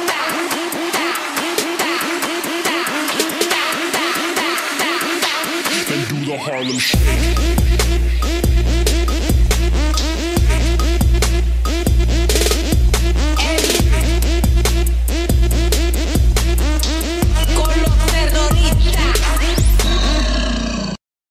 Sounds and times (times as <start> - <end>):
Music: 0.0 - 20.4.